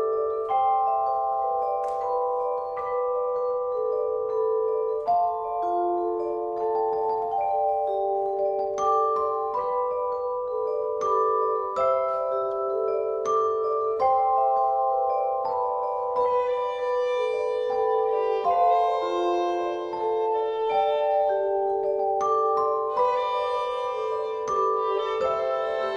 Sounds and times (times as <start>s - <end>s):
Glockenspiel: 0.0s - 25.9s
Marimba, xylophone: 0.0s - 25.9s
Violin, fiddle: 23.0s - 25.9s.